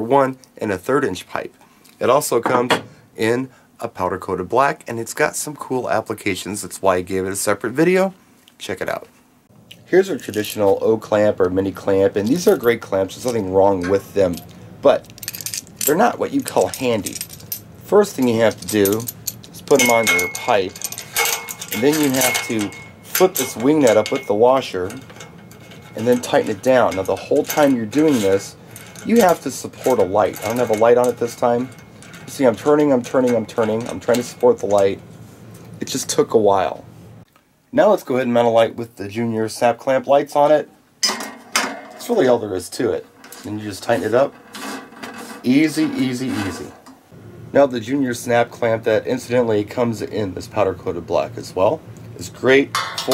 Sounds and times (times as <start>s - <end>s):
Speech: 0.0s - 9.2s, 9.9s - 15.0s, 15.9s - 17.2s, 17.9s - 20.9s, 21.7s - 25.0s, 26.0s - 31.7s, 32.3s - 35.0s, 35.8s - 36.9s, 37.7s - 40.7s, 42.0s - 44.4s, 45.4s - 46.8s, 47.5s - 53.1s.